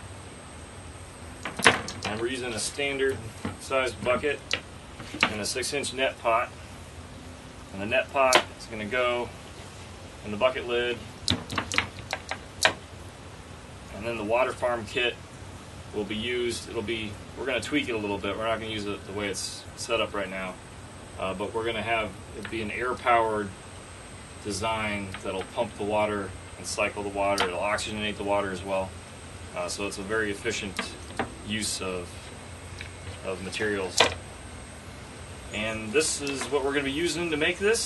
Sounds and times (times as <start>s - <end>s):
Outside, rural or natural: 0.0s - 37.8s
Speech: 2.1s - 4.4s, 5.2s - 6.6s, 7.8s - 9.4s, 10.2s - 11.0s, 13.9s - 15.2s, 16.0s - 20.6s, 21.2s - 23.6s, 24.4s - 28.9s, 29.5s - 32.2s, 33.2s - 34.1s, 35.5s - 37.8s.